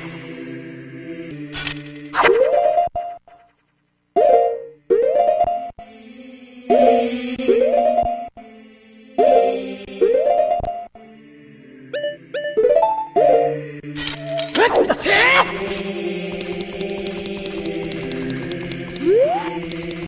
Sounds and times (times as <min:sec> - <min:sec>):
Music: 0:00.0 - 0:03.2, 0:04.2 - 0:14.6, 0:15.4 - 0:20.0.